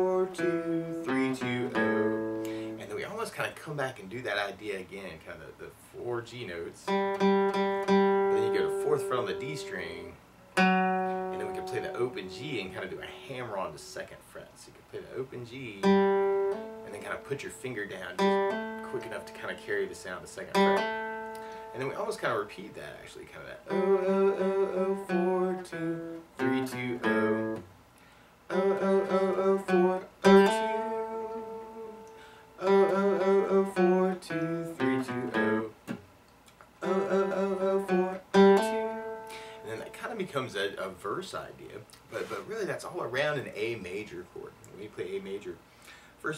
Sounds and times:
Speech: 2.8 - 6.9, 8.3 - 10.2, 11.4 - 15.9, 16.8 - 20.6, 21.7 - 23.7, 39.7 - 45.6.

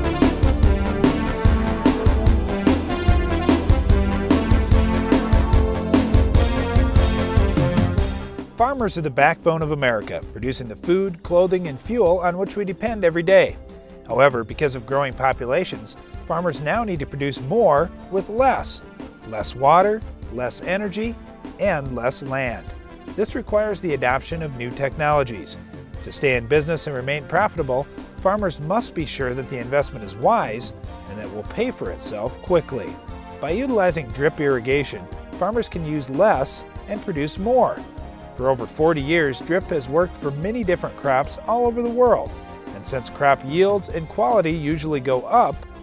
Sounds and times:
Music: 0.0 - 45.8
Speech: 8.6 - 22.6, 23.2 - 37.8, 38.4 - 45.6.

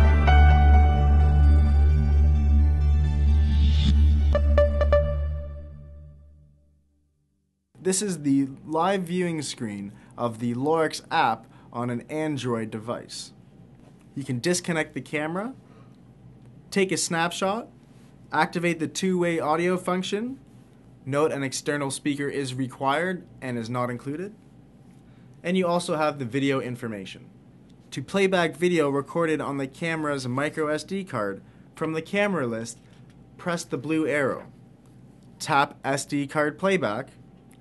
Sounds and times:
Speech: 7.8 - 13.4, 14.2 - 15.6, 16.7 - 17.7, 18.3 - 20.4, 21.1 - 24.4, 25.4 - 27.3, 27.9 - 32.8, 33.4 - 34.6, 35.4 - 37.2.

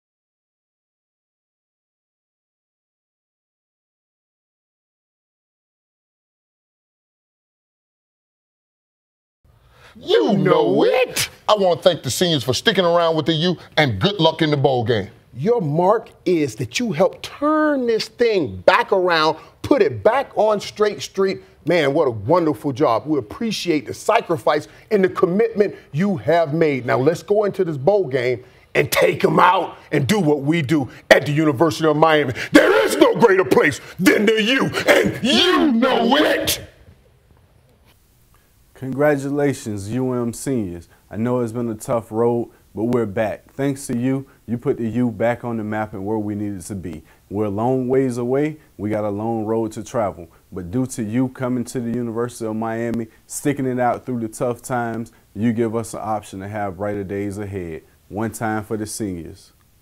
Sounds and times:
Speech: 10.0 - 36.8, 38.8 - 59.6.

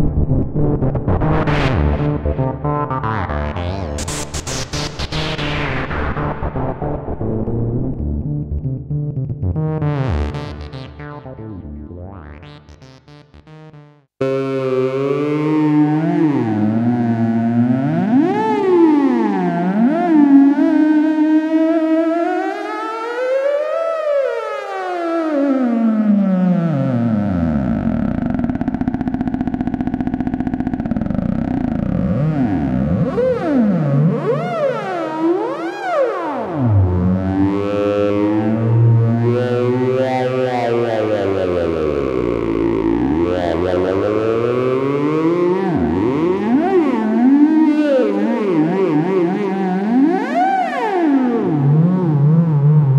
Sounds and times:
Synthesizer: 0.0 - 52.9.

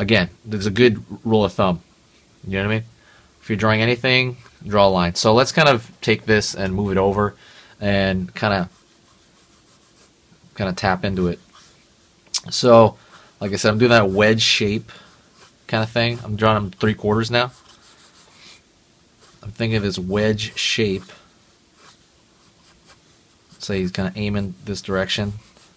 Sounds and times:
Speech: 0.0 - 1.8, 2.4 - 8.7, 10.6 - 11.4, 12.4 - 14.9, 15.7 - 17.6, 19.4 - 21.2, 23.6 - 25.5
Inside, small room: 0.0 - 25.7
Writing: 8.7 - 10.2, 15.0 - 16.4, 17.5 - 18.6, 19.2 - 21.2, 21.8 - 23.7, 25.3 - 25.7.

